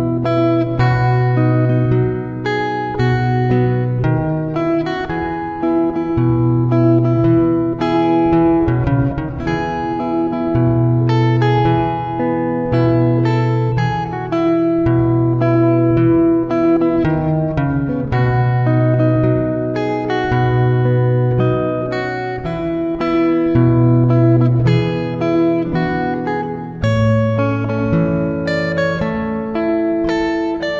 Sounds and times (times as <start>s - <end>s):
Music: 0.0s - 30.7s.